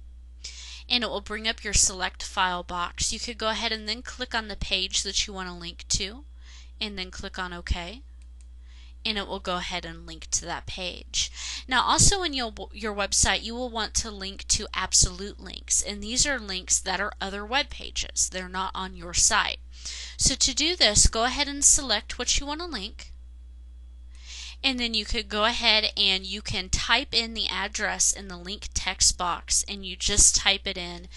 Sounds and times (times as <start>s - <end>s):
Narration, monologue: 0.0s - 31.1s.